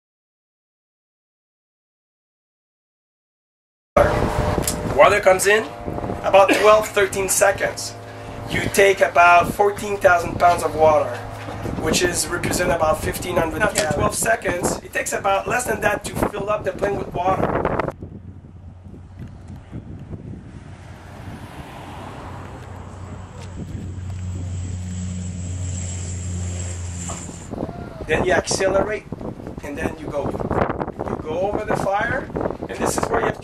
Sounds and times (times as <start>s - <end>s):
Speech: 5.0s - 11.2s, 11.8s - 17.5s, 27.7s - 30.4s, 31.2s - 33.4s.